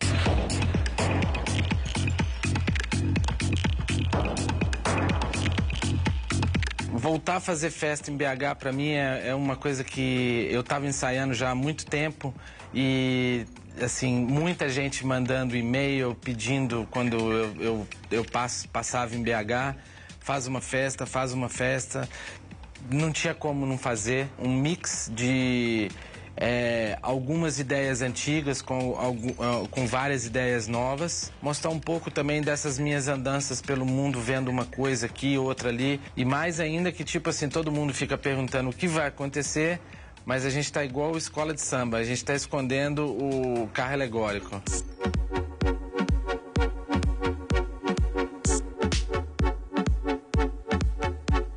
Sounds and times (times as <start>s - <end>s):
Music: 0.0s - 51.5s
Speech: 6.9s - 22.1s, 22.8s - 44.8s.